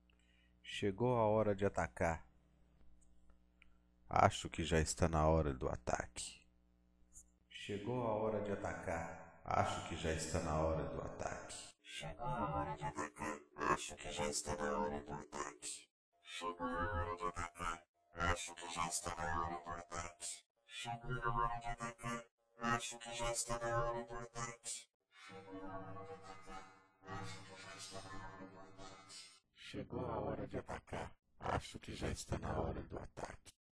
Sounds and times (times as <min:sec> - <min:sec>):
Speech: 0:00.7 - 0:02.2, 0:04.1 - 0:06.4, 0:07.6 - 0:26.5, 0:27.1 - 0:33.6
Music: 0:25.2 - 0:28.7.